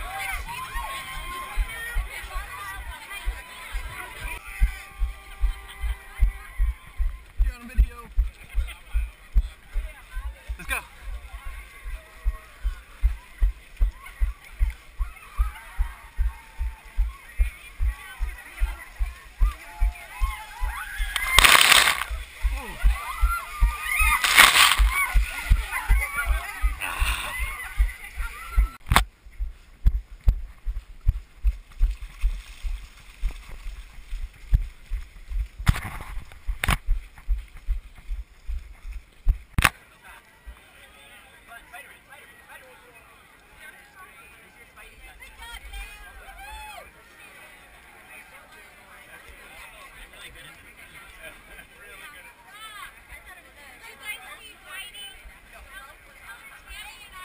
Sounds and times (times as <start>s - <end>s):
Run: 0.0s - 41.9s.